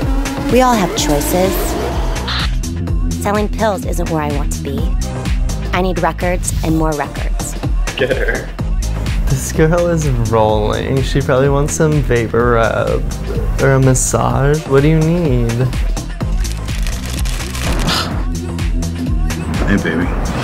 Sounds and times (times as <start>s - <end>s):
Music: 0.0s - 20.4s
Speech: 3.2s - 4.9s, 5.8s - 7.4s, 19.7s - 20.1s.